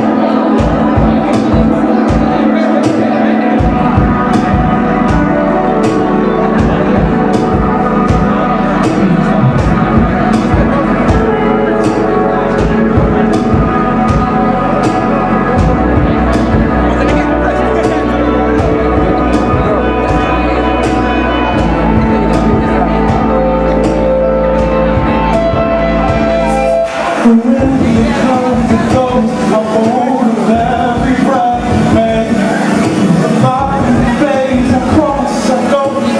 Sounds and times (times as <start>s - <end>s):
Musical instrument: 0.0s - 36.2s.